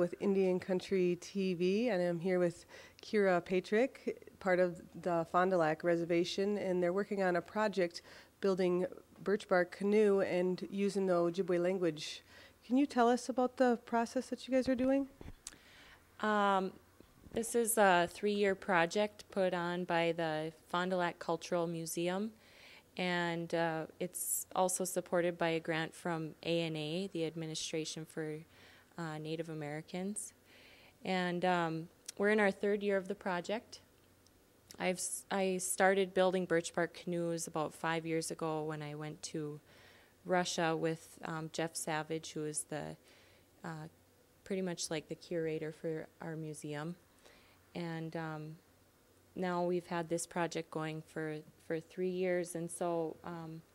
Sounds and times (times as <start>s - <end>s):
Speech: 0.0s - 15.2s, 16.2s - 16.8s, 17.4s - 22.4s, 23.0s - 28.4s, 29.0s - 30.4s, 31.0s - 33.8s, 34.7s - 39.6s, 40.3s - 43.0s, 43.6s - 43.9s, 44.5s - 47.0s, 47.8s - 48.6s, 49.4s - 53.7s.